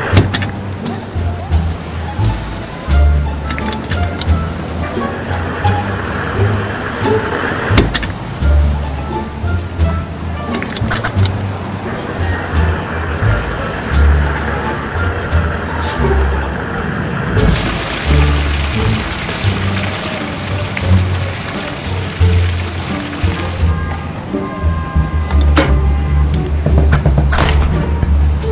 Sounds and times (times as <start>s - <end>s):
Music: 0.0s - 28.5s.